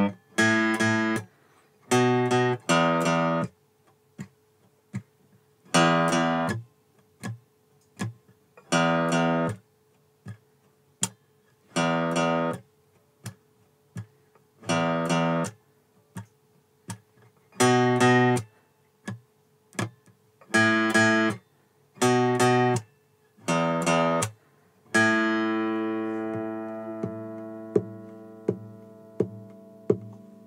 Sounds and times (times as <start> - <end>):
Strum: 22.0 - 30.4
Electric guitar: 23.4 - 30.4.